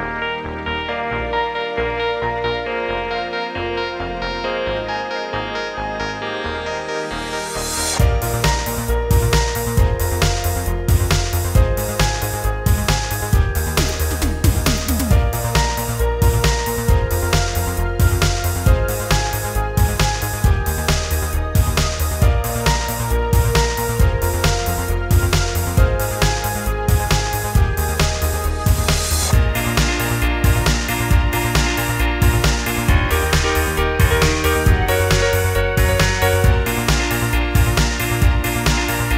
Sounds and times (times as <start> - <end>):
Music: 0.0 - 39.1.